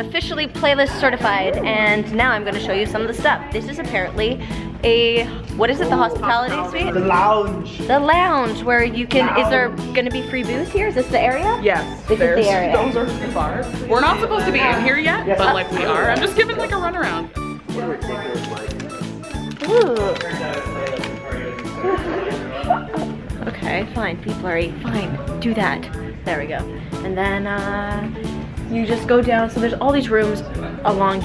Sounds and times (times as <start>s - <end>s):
Music: 0.0s - 31.2s.